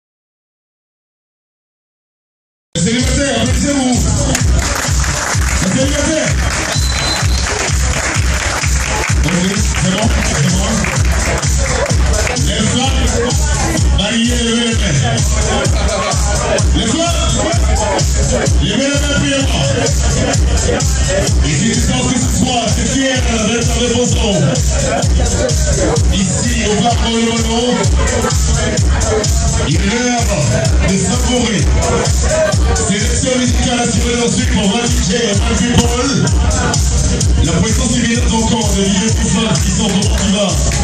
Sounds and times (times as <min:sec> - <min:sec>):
Speech: 0:02.8 - 0:04.6, 0:05.6 - 0:06.4, 0:09.1 - 0:11.0, 0:12.1 - 0:40.8
Music: 0:02.8 - 0:40.8.